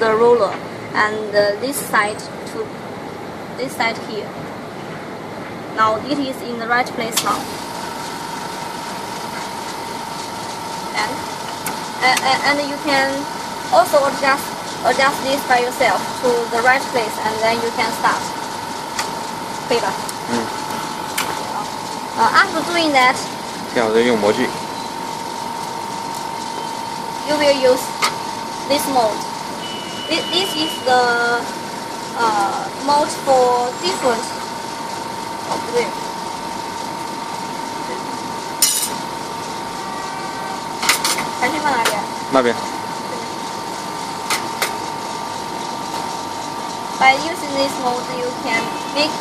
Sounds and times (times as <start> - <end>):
Speech: 0.0 - 2.7, 5.8 - 7.4, 32.2 - 34.3.